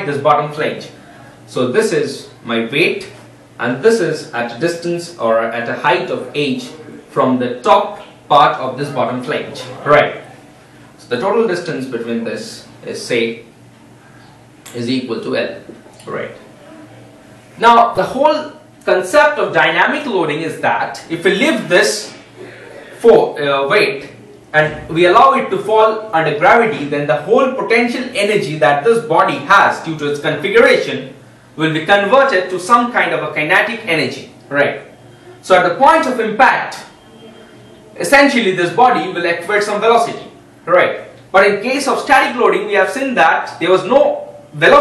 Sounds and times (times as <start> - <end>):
Speech: 0.0 - 13.5, 14.7 - 44.8.